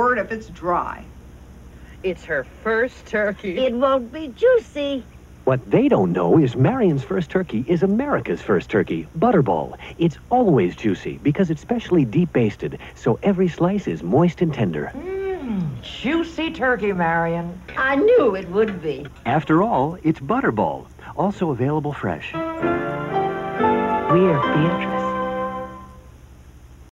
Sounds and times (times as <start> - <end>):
Speech: 5.5 - 15.0, 15.9 - 22.4, 24.1 - 25.1
Music: 22.3 - 26.2.